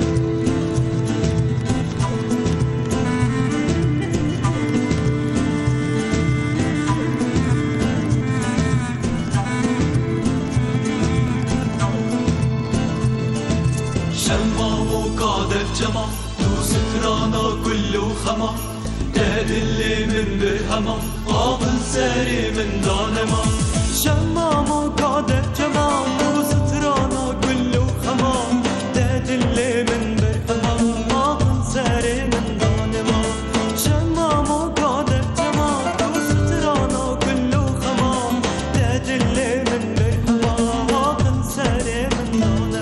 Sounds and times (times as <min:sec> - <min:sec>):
Music: 0:00.0 - 0:42.8.